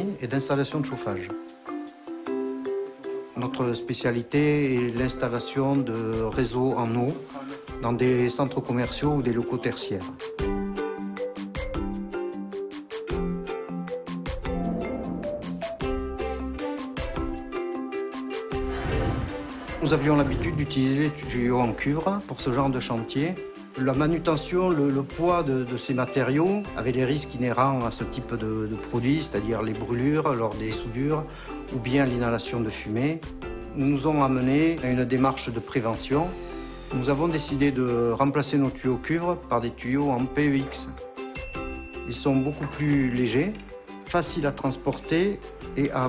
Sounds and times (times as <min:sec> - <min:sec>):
Speech: 0:00.0 - 0:01.4, 0:03.4 - 0:10.2, 0:19.8 - 0:33.2, 0:33.8 - 0:36.3, 0:37.0 - 0:41.0, 0:42.1 - 0:46.0
Music: 0:00.0 - 0:46.0.